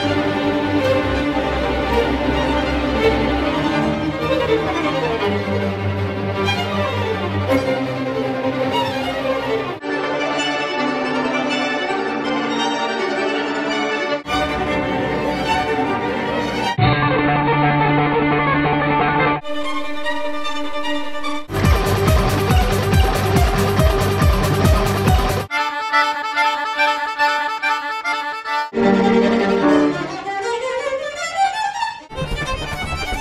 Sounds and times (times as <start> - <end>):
Music: 0.0 - 33.2.